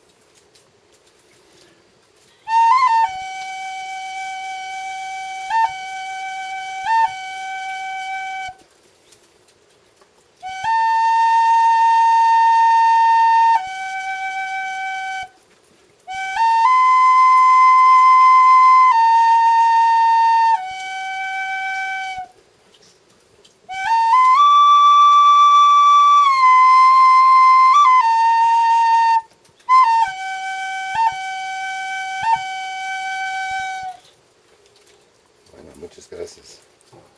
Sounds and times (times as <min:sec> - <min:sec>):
Flute: 0:02.2 - 0:08.7, 0:10.4 - 0:22.8, 0:23.7 - 0:34.2.